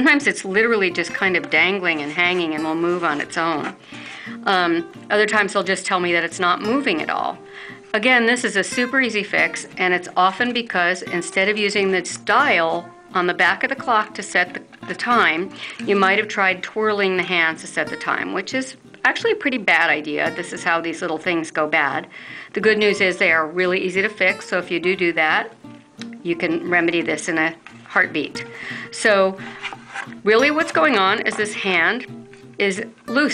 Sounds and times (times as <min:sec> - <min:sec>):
Speech: 0:00.0 - 0:03.8, 0:04.4 - 0:07.4, 0:08.0 - 0:25.5, 0:26.2 - 0:29.4, 0:30.2 - 0:33.3
Music: 0:00.0 - 0:33.3.